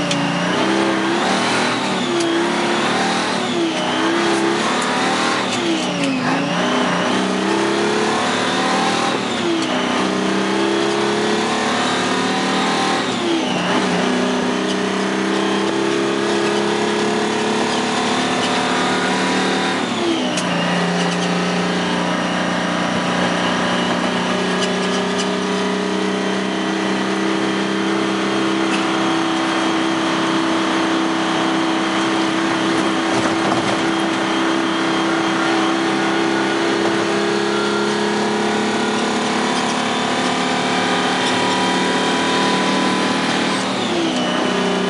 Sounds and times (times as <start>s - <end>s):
Truck: 0.0s - 44.9s.